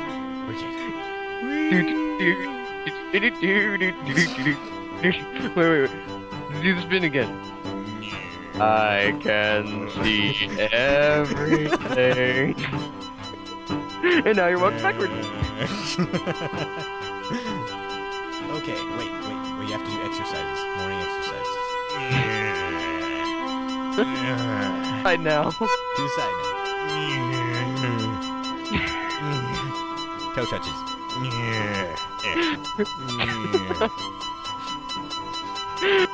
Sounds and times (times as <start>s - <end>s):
Music: 0.0s - 36.1s
Speech: 0.5s - 0.9s, 1.5s - 2.5s, 6.5s - 7.3s, 8.0s - 12.6s, 14.2s - 16.0s, 18.5s - 23.2s, 24.0s - 28.2s, 30.4s - 32.4s, 33.0s - 33.9s.